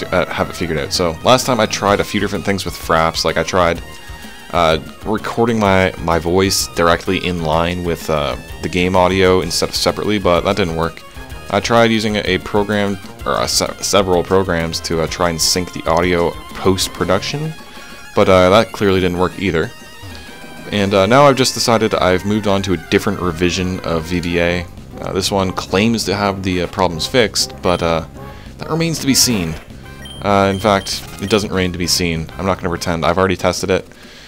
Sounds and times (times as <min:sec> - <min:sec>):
Speech: 0:00.0 - 0:03.8, 0:04.5 - 0:17.6, 0:18.2 - 0:19.8, 0:20.7 - 0:29.6, 0:30.2 - 0:33.9
Music: 0:00.0 - 0:34.2.